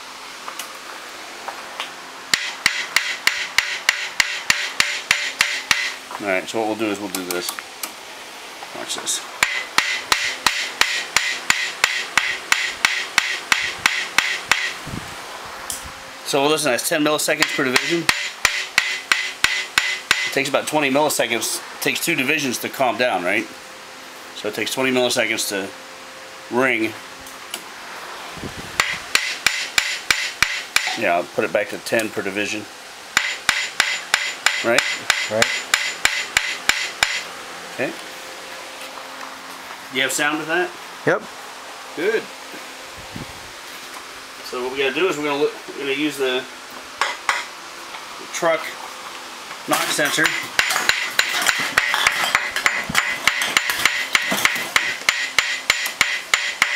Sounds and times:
Speech: 6.2 - 7.6, 8.7 - 9.3, 16.2 - 18.1, 20.3 - 23.5, 24.4 - 25.8, 26.5 - 27.0, 30.9 - 32.7, 34.6 - 35.6, 37.8 - 38.0, 39.9 - 41.3, 42.0 - 42.3, 44.4 - 46.5, 48.2 - 48.8, 49.7 - 50.4.

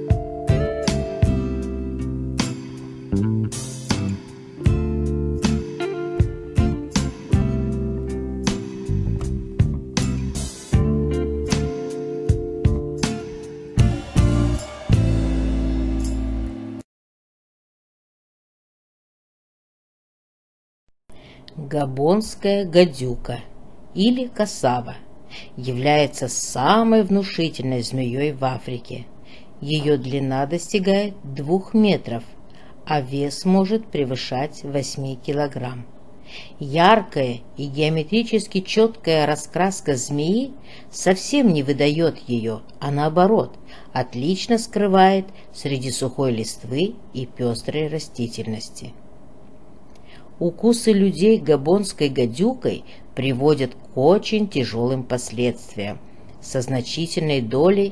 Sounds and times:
Speech: 21.5 - 35.9, 36.6 - 49.0, 50.4 - 57.9.

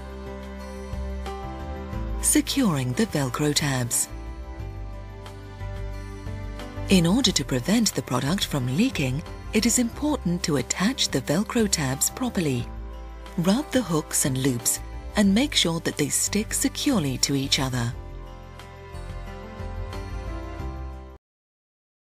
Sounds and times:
Music: 0.0 - 21.2
Speech: 2.2 - 4.1, 6.9 - 12.7, 13.4 - 18.0.

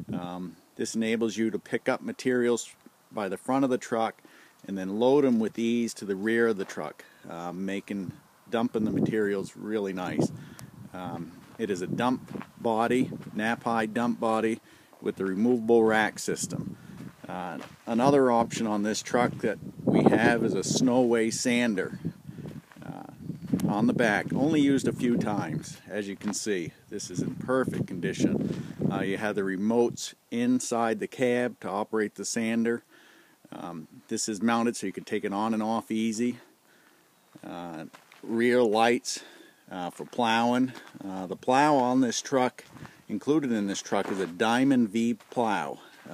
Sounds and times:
Speech: 0.1 - 10.3, 10.9 - 16.6, 17.2 - 22.0, 22.8 - 32.8, 33.5 - 36.5, 37.4 - 46.1.

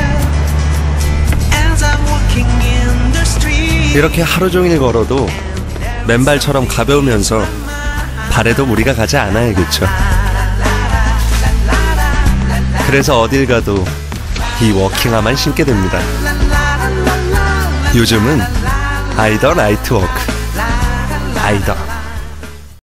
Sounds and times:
Music: 0.0 - 22.8
Speech: 4.0 - 5.4, 6.1 - 7.5, 8.3 - 10.0, 12.9 - 13.9, 14.6 - 16.1, 17.9 - 18.5, 19.2 - 20.3, 21.2 - 22.0.

